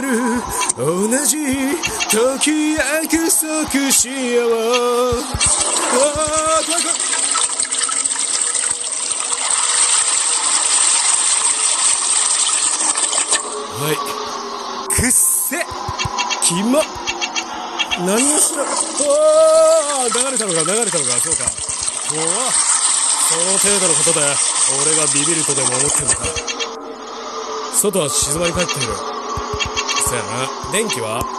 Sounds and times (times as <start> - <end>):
Speech: 0.0 - 7.0, 13.7 - 14.2, 14.9 - 15.8, 16.4 - 16.9, 17.9 - 26.4, 27.8 - 29.0, 30.0 - 31.3.